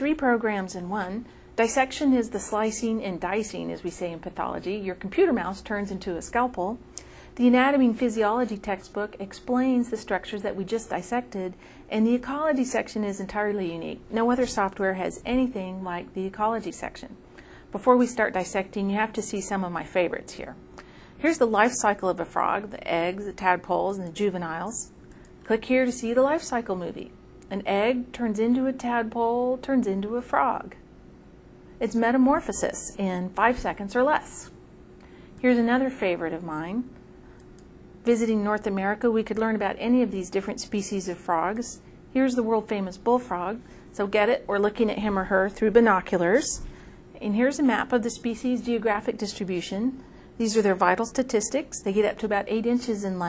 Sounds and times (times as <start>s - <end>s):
Speech: 0.0s - 6.8s, 7.4s - 20.6s, 21.2s - 30.8s, 31.8s - 34.6s, 35.4s - 36.9s, 38.0s - 53.2s.